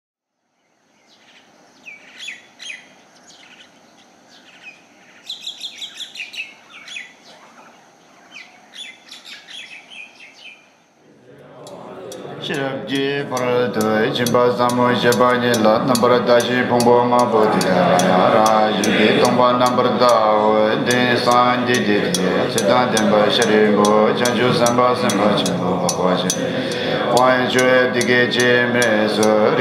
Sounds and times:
Chirp, tweet: 0.5s - 10.8s.

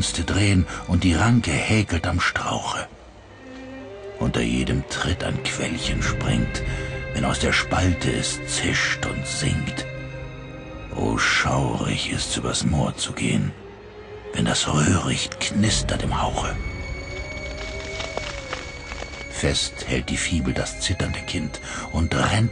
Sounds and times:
Speech: 0.0s - 2.9s, 4.2s - 6.6s, 7.2s - 9.9s, 10.9s - 13.6s, 14.4s - 16.6s, 19.4s - 22.5s
Music: 0.0s - 22.5s.

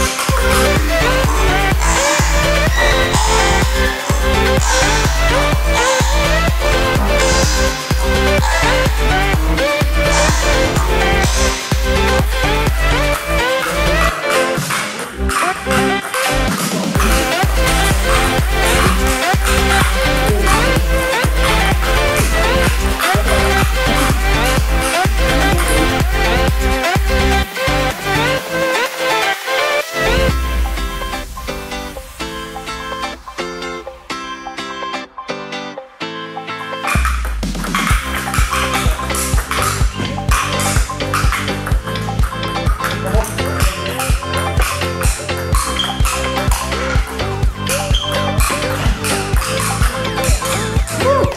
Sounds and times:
Music: 0.0s - 51.3s.

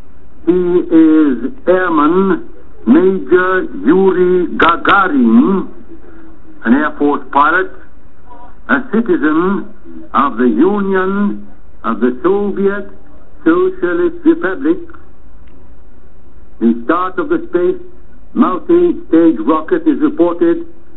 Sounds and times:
Speech: 0.5s - 5.8s, 6.6s - 15.0s, 16.6s - 20.7s
Radio: 0.5s - 15.1s, 16.6s - 20.8s.

